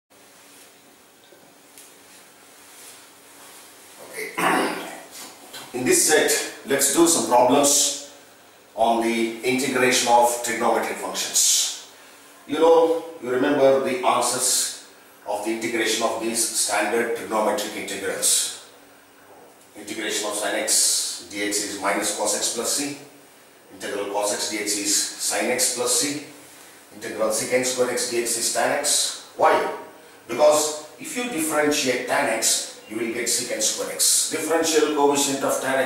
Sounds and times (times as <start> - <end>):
Speech: 4.0 - 8.2, 8.8 - 18.7, 19.3 - 35.8.